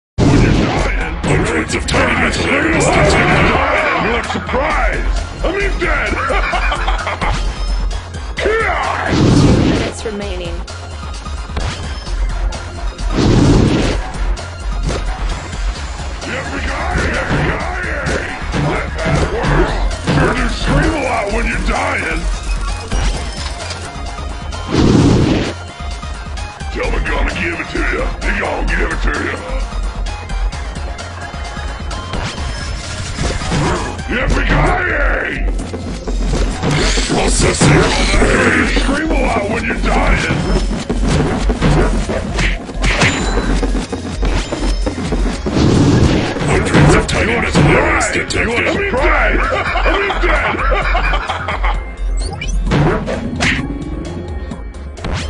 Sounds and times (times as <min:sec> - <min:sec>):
Music: 0:00.2 - 0:55.2.